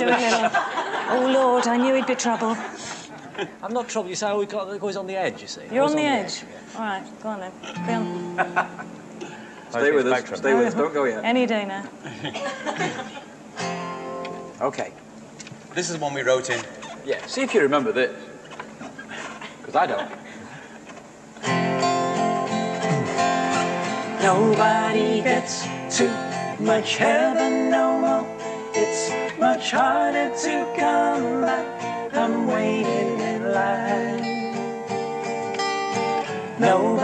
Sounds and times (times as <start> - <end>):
Laughter: 0.0 - 3.6, 8.3 - 8.9, 12.0 - 13.4, 18.9 - 20.4
Music: 7.8 - 9.0, 13.6 - 14.6, 21.4 - 37.0.